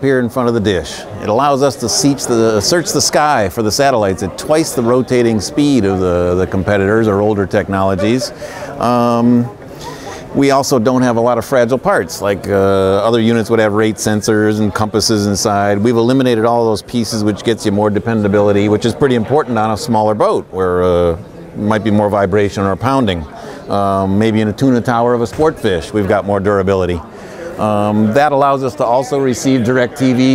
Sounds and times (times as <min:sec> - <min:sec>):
Speech: 0:00.0 - 0:30.3.